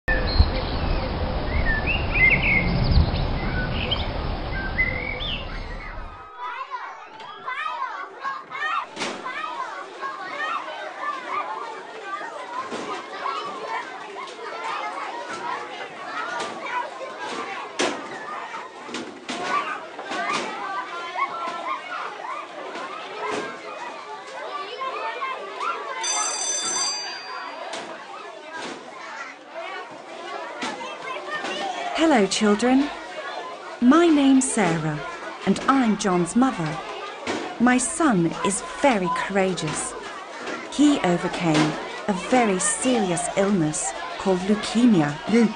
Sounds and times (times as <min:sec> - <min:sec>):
Chirp, tweet: 0:00.1 - 0:05.9.